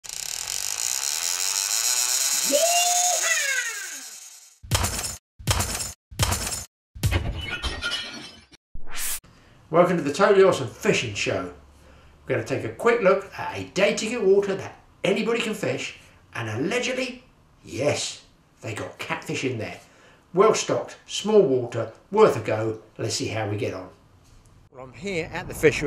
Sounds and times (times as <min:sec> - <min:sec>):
Speech: 0:09.7 - 0:11.6, 0:12.3 - 0:19.8, 0:20.4 - 0:24.0.